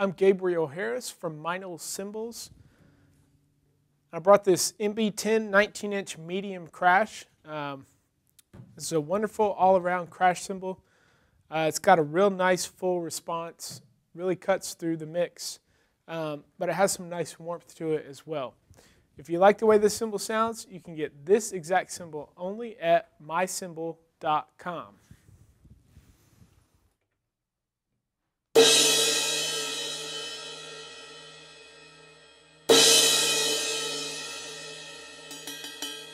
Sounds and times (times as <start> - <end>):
Speech: 0.0 - 2.6, 4.1 - 7.9, 8.8 - 10.8, 11.5 - 18.6, 19.2 - 25.0
Music: 28.6 - 36.1.